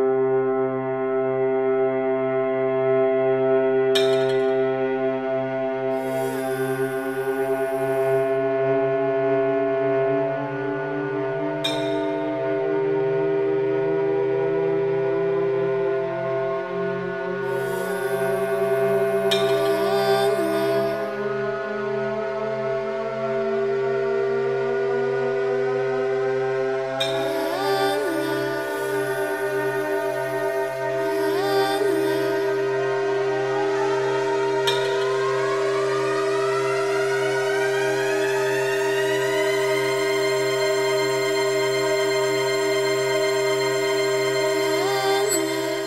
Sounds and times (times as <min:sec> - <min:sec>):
Music: 0:00.0 - 0:45.8.